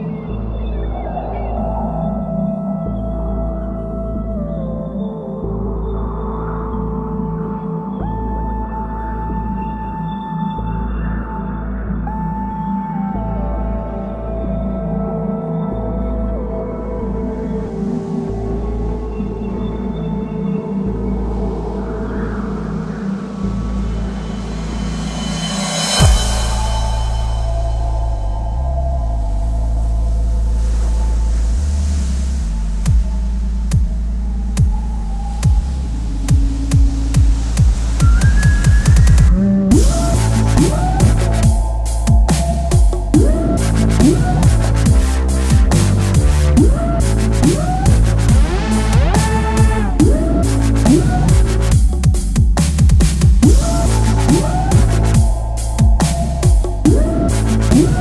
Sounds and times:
Dubstep: 0:22.7 - 0:58.0.

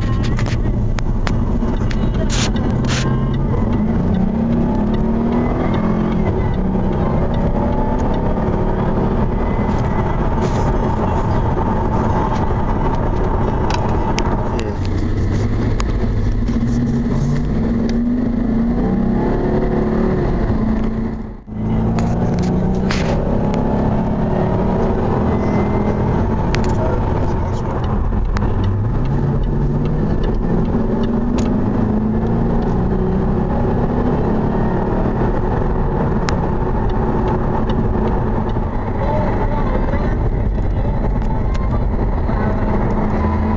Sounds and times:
Car: 0:00.0 - 0:43.5
Accelerating, revving, vroom: 0:01.2 - 0:43.5.

